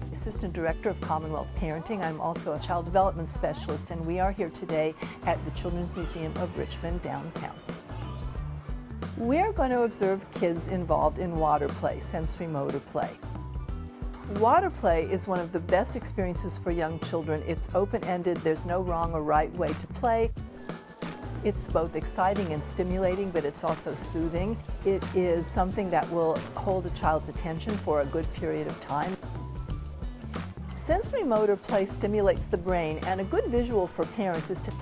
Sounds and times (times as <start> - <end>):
Music: 0.0 - 34.8
Speech: 0.1 - 7.7, 9.2 - 13.2, 14.3 - 20.3, 21.5 - 29.2, 30.8 - 34.8.